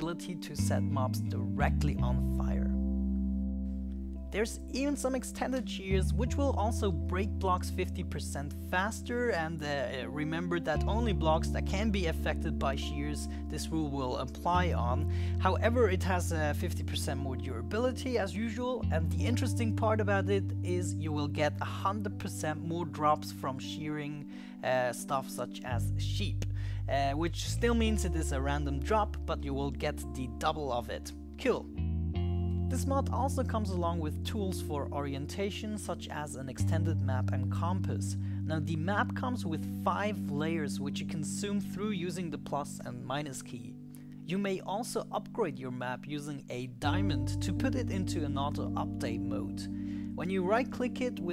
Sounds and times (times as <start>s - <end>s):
Speech: 0.0s - 2.8s, 4.3s - 31.7s, 32.7s - 51.3s
Music: 0.0s - 51.3s.